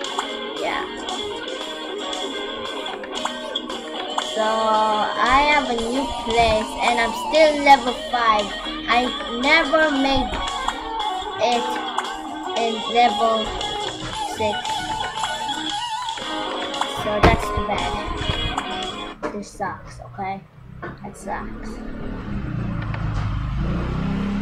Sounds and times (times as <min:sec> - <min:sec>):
Music: 0:00.0 - 0:19.3
Speech: 0:04.4 - 0:10.3, 0:11.4 - 0:11.8, 0:12.6 - 0:13.5, 0:14.3 - 0:14.7, 0:17.0 - 0:18.1, 0:19.2 - 0:20.4, 0:21.0 - 0:21.7.